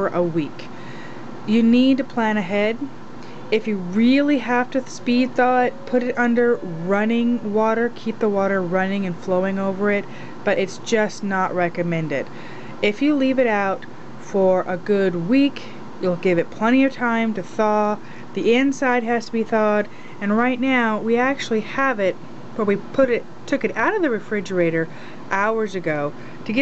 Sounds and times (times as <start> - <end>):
Speech: 0.0 - 0.7, 1.5 - 2.9, 3.5 - 26.6.